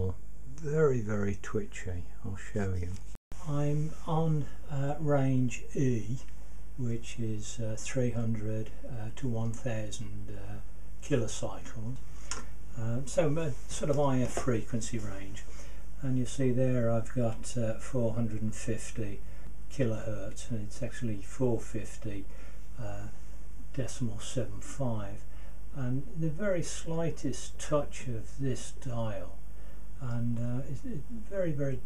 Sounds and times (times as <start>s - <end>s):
Speech: 0.0s - 12.0s, 12.7s - 29.4s, 30.0s - 31.8s.